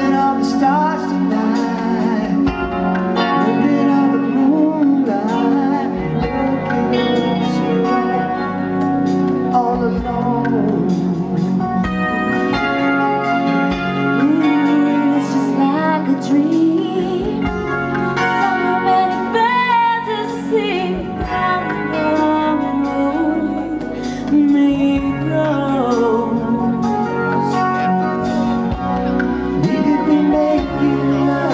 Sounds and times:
Music: 0:00.0 - 0:31.5.

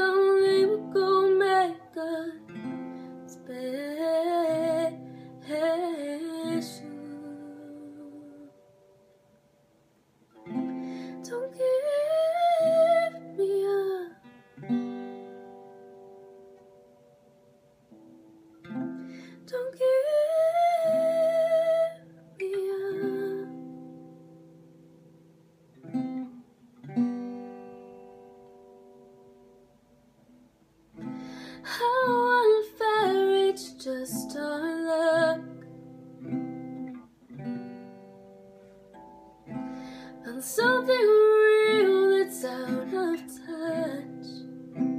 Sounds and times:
Guitar: 0:00.0 - 0:44.9.

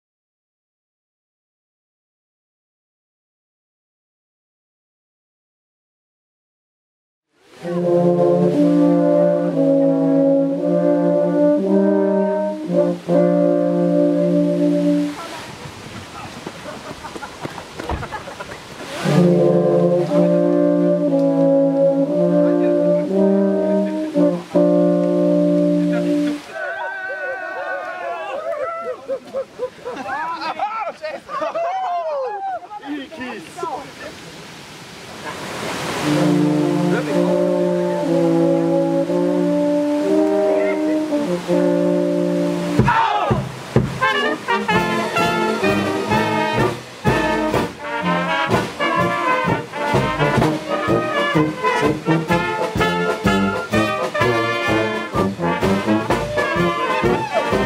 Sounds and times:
Stream: 0:07.4 - 0:57.6.

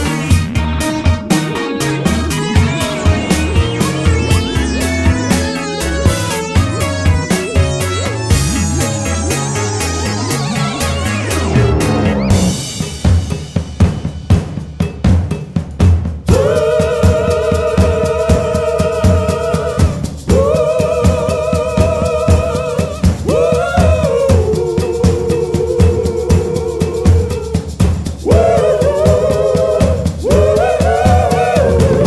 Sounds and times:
Bass drum: 0:00.0 - 0:32.0
Drum kit: 0:00.0 - 0:32.0.

